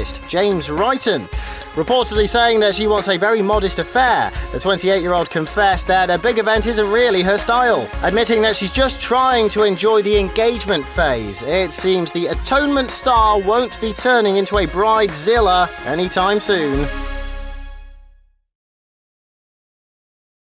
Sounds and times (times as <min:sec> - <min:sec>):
Speech: 0:00.0 - 0:16.9
Music: 0:00.0 - 0:18.5.